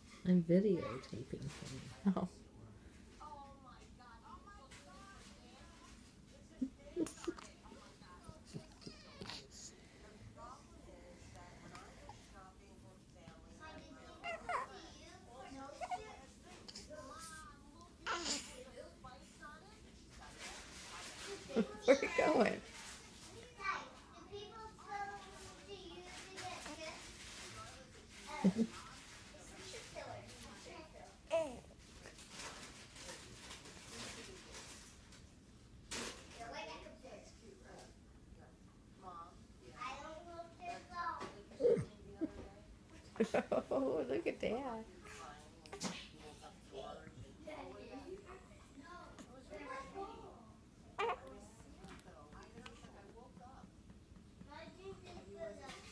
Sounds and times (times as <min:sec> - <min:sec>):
Speech: 0:00.1 - 0:02.5, 0:03.2 - 0:31.7.